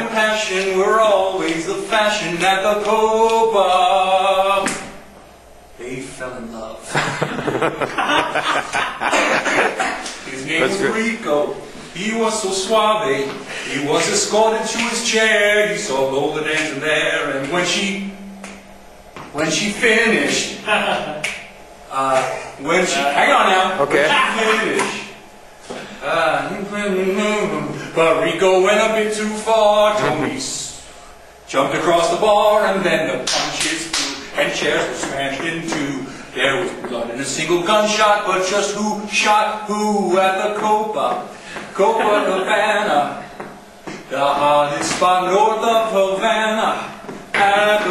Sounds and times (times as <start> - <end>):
Speech: 5.8 - 6.9, 10.3 - 11.6, 21.9 - 25.1, 29.8 - 30.7.